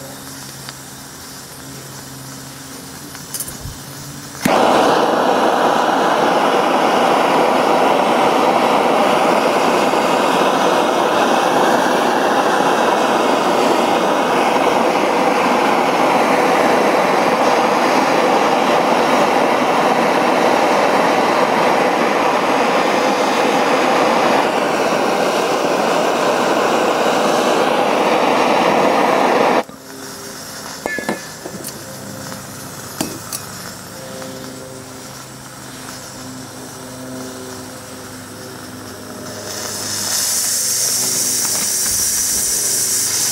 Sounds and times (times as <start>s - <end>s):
Steam: 0.0s - 43.3s.